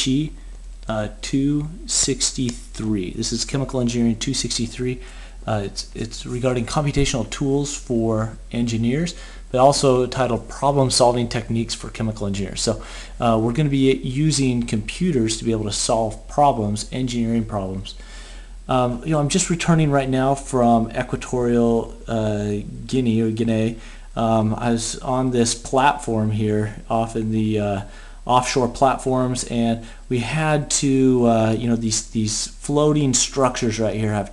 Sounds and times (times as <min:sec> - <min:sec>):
Speech: 0:00.0 - 0:18.0, 0:18.7 - 0:34.3.